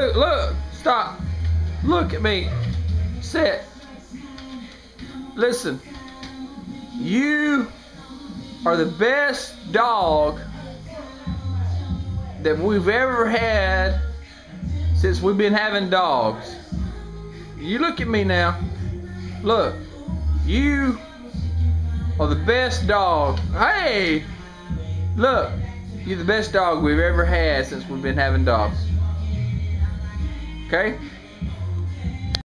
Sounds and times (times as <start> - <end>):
Speech: 0.0 - 1.2, 1.8 - 3.7, 5.4 - 5.8, 7.0 - 7.7, 8.6 - 10.5, 12.3 - 14.1, 15.0 - 16.6, 17.6 - 18.6, 19.4 - 19.8, 20.5 - 21.0, 22.2 - 24.3, 25.2 - 28.8, 30.7 - 31.1
Music: 0.0 - 32.5.